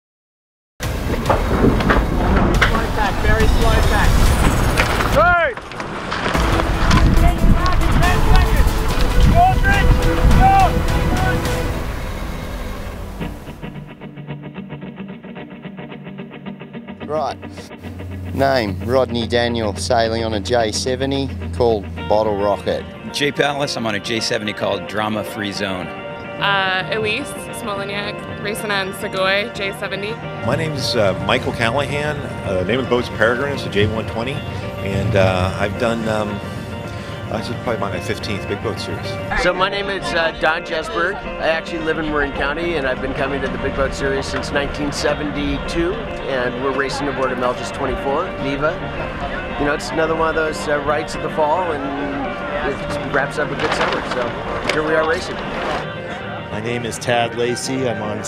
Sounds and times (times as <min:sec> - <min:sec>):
Music: 0:00.8 - 0:58.2
Speech: 0:18.4 - 0:36.4, 0:37.3 - 0:48.8, 0:49.6 - 0:55.3, 0:56.5 - 0:58.2.